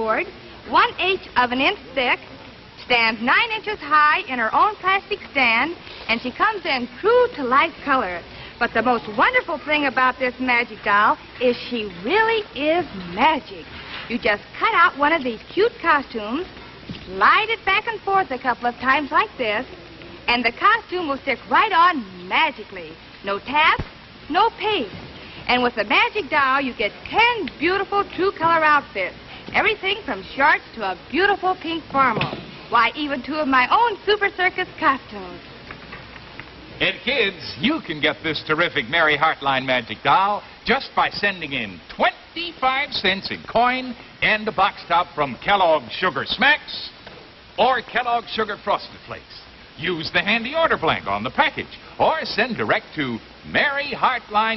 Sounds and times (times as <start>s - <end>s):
Speech: 0.0s - 16.5s, 20.3s - 35.4s, 36.8s - 47.0s.